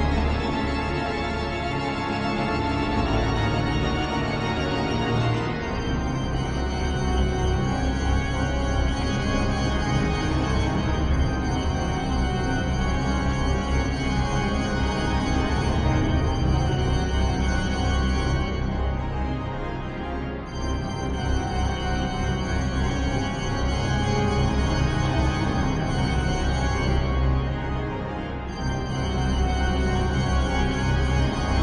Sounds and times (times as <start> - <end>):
Scary music: 0.0 - 31.6.